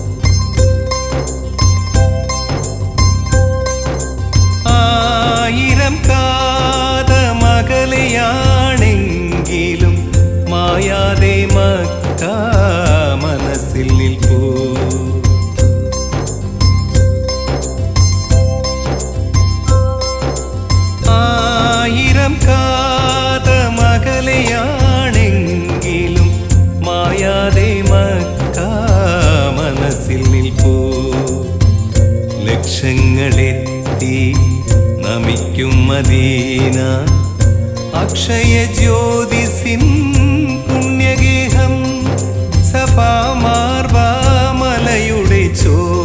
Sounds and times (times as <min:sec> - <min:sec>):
Music: 0:00.0 - 0:46.0
Male singing: 0:04.7 - 0:15.4, 0:21.0 - 0:31.8, 0:32.4 - 0:46.0.